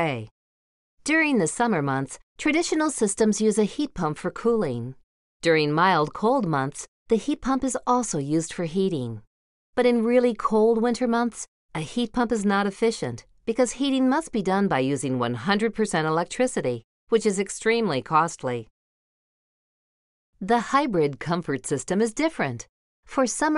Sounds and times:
Speech: 0.0s - 0.3s, 1.1s - 18.7s, 20.4s - 23.5s.

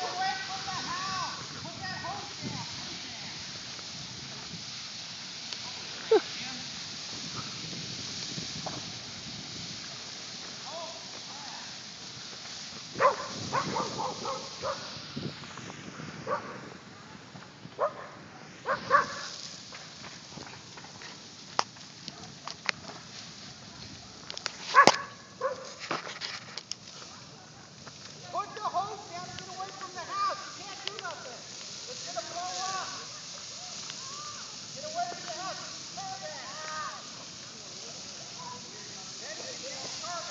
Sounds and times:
Fire: 0.0s - 40.3s
Wind noise (microphone): 0.4s - 3.3s, 6.8s - 10.0s, 12.8s - 19.3s.

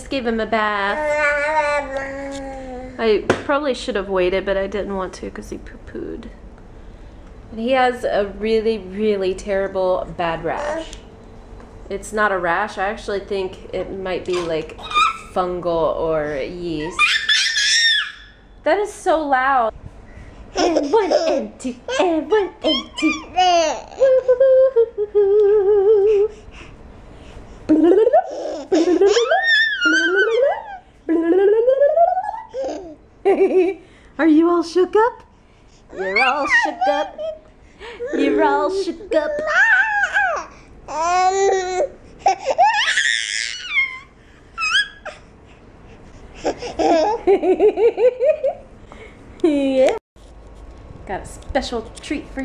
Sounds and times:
Babbling: 0.9s - 3.0s, 39.2s - 41.9s
Child speech, kid speaking: 0.9s - 3.0s, 10.4s - 11.0s, 36.0s - 37.0s, 38.1s - 39.8s.

